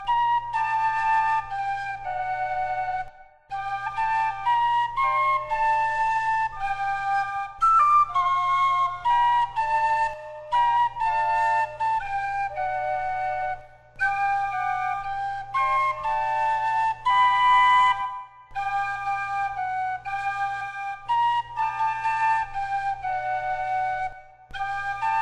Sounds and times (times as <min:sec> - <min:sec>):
Flute: 0:00.0 - 0:25.2.